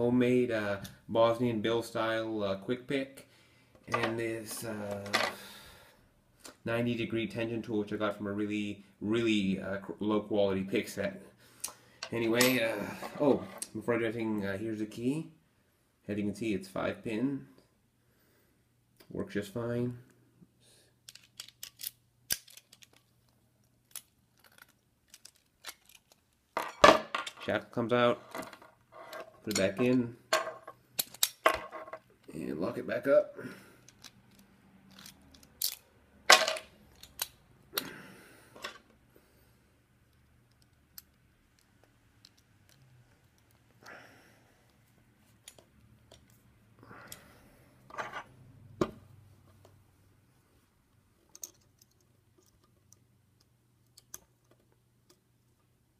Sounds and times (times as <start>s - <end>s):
Speech: 0.0s - 3.2s, 3.9s - 5.2s, 6.6s - 11.2s, 12.1s - 15.4s, 16.1s - 17.6s, 19.1s - 20.1s, 27.4s - 28.2s, 29.5s - 30.2s, 32.3s - 33.4s.